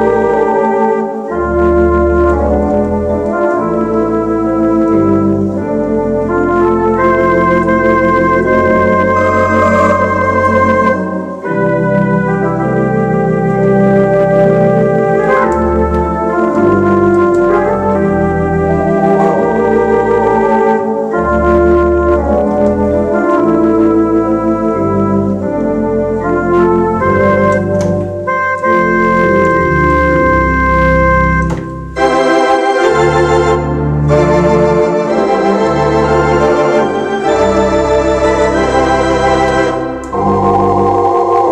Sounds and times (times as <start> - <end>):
Organ: 0.0 - 41.5.